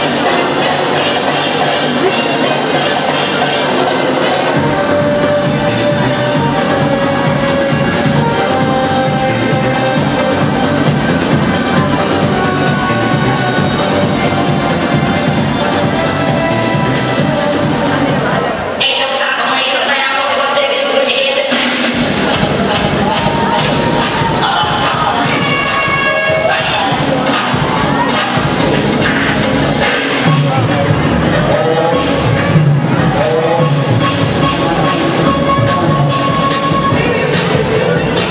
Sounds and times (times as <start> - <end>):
Music: 0.0 - 38.3
Speech: 17.7 - 22.0, 23.2 - 28.7, 30.1 - 32.5.